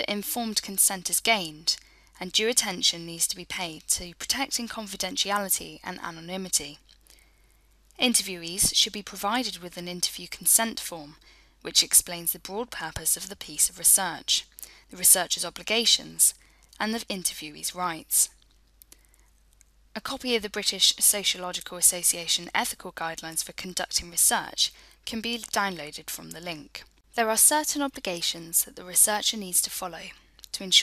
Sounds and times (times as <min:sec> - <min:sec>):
Speech: 0:00.0 - 0:06.8, 0:08.0 - 0:18.3, 0:20.0 - 0:30.8.